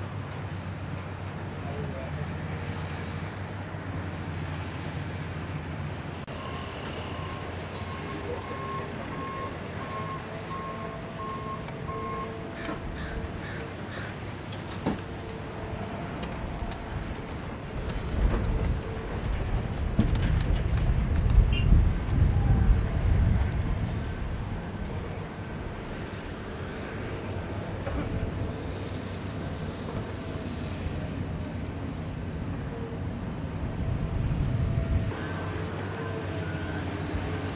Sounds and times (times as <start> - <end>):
Speech: 1.6 - 2.4.